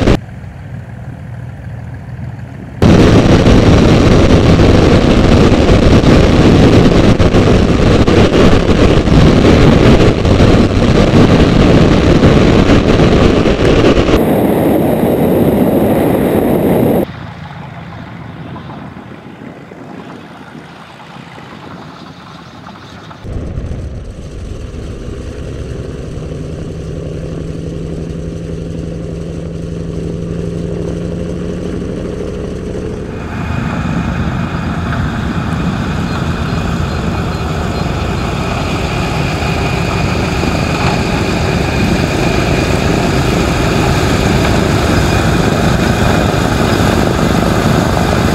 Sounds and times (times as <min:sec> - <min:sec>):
Propeller, airscrew: 0:00.0 - 0:48.3.